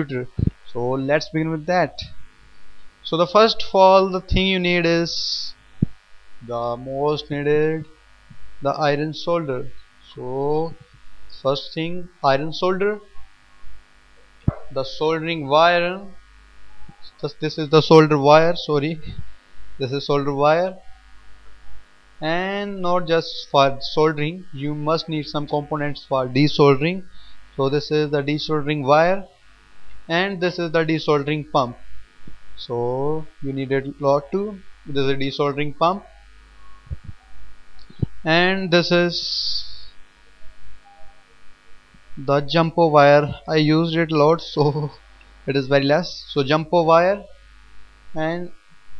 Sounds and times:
Speech: 0.0 - 2.2, 3.1 - 5.6, 6.4 - 7.9, 8.6 - 10.8, 11.4 - 13.2, 14.5 - 16.2, 17.0 - 19.2, 19.8 - 20.8, 22.2 - 27.0, 27.6 - 29.3, 30.1 - 31.8, 32.6 - 36.1, 38.2 - 40.0, 42.2 - 47.3, 48.2 - 48.6.

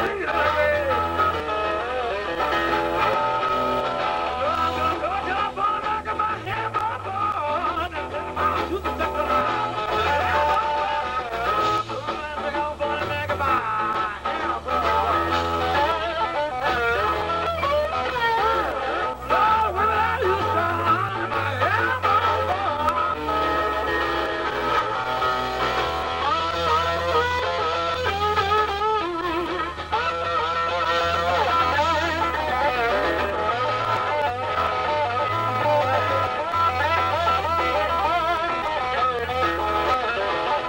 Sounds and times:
Music: 0.0 - 40.6.

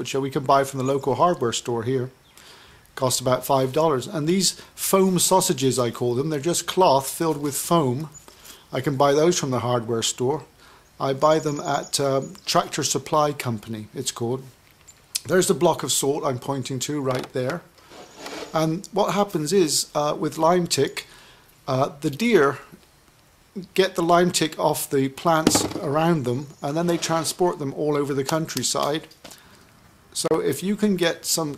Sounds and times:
Speech: 0.0 - 2.2, 3.0 - 8.1, 8.7 - 14.5, 15.2 - 17.7, 18.6 - 21.1, 21.7 - 22.8, 23.6 - 29.1, 30.2 - 31.5.

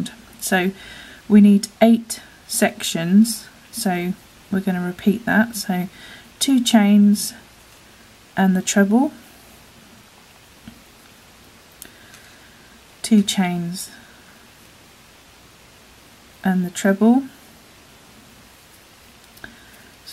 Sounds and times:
Speech: 0.0 - 7.4, 8.4 - 9.2, 13.0 - 14.0, 16.4 - 17.4.

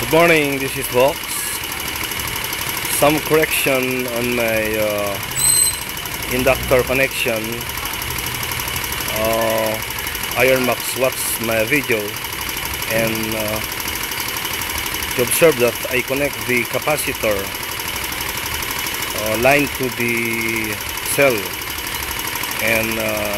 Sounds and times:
Speech: 0.0 - 1.6, 2.9 - 5.3, 6.3 - 7.7, 9.1 - 12.2, 12.9 - 13.6, 15.2 - 17.5, 19.2 - 21.6, 22.6 - 23.3
Engine: 0.0 - 23.3
Motorcycle: 0.0 - 23.3
Outside, urban or manmade: 0.0 - 23.3.

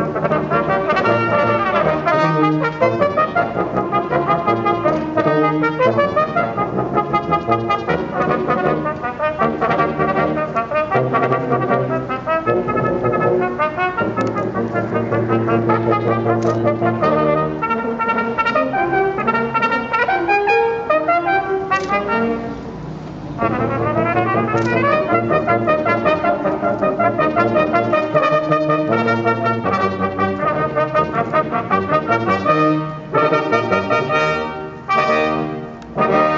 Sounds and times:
Trombone: 0.0 - 36.3.

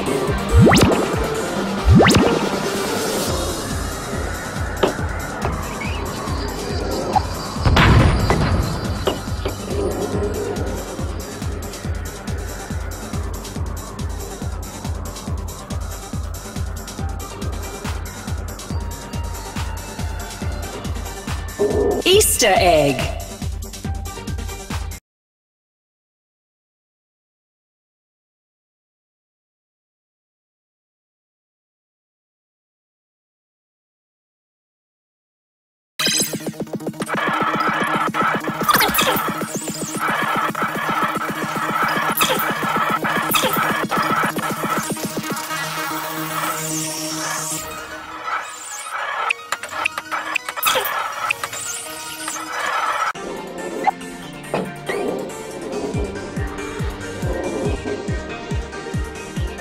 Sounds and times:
Music: 0.0 - 25.0, 36.0 - 59.6.

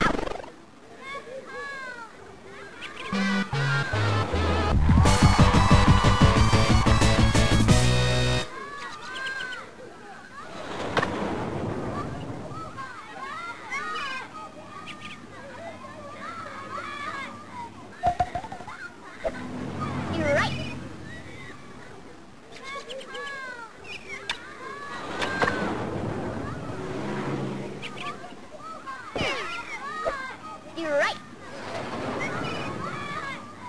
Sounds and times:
Outside, urban or manmade: 0.0 - 33.6
Speech: 0.8 - 3.2, 11.8 - 19.2, 19.8 - 25.4, 27.8 - 33.6.

